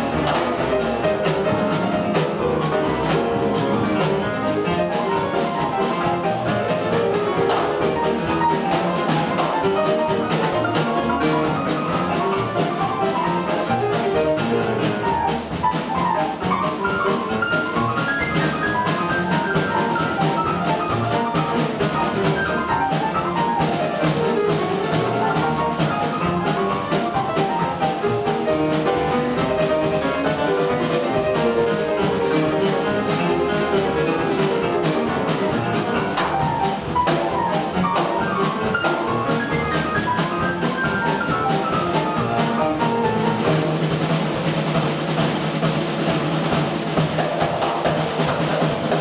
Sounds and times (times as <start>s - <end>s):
Jazz: 0.0s - 49.0s
Piano: 0.0s - 49.0s.